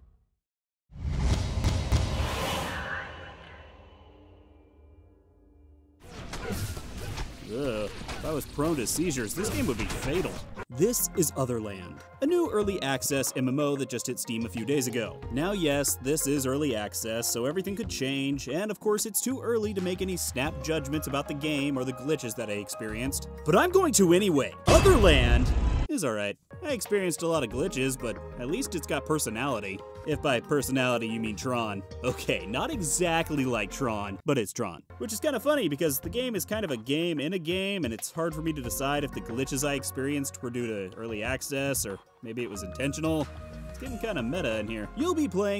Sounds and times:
Speech: 0:07.5 - 0:45.5
Music: 0:07.6 - 0:45.5.

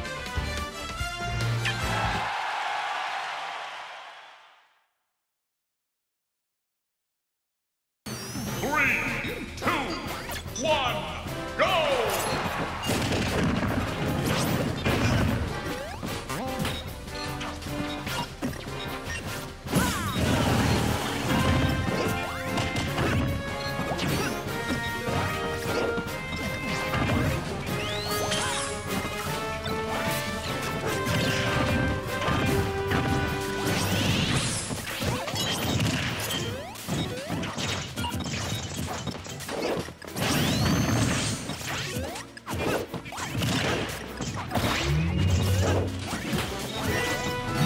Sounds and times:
Smash, crash: 0:12.2 - 0:15.8, 0:19.7 - 0:25.8, 0:30.0 - 0:47.6.

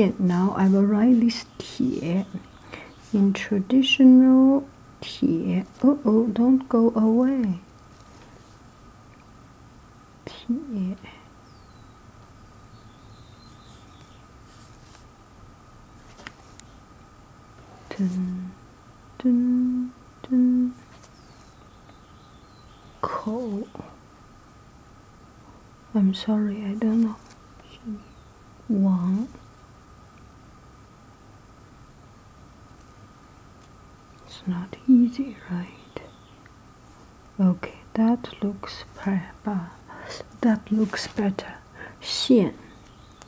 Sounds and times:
Speech: 0:00.0 - 0:02.4, 0:03.1 - 0:07.7, 0:10.3 - 0:11.2, 0:17.9 - 0:18.6, 0:23.0 - 0:24.0, 0:26.0 - 0:28.1, 0:28.7 - 0:29.4, 0:34.3 - 0:36.1, 0:37.4 - 0:42.8.

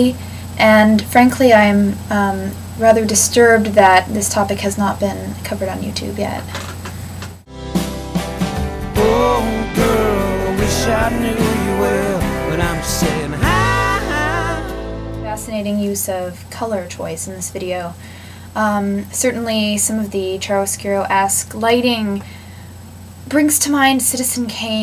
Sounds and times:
Speech: 0:00.0 - 0:06.6, 0:15.3 - 0:18.0, 0:18.6 - 0:22.2, 0:23.3 - 0:24.8
Music: 0:07.5 - 0:15.6.

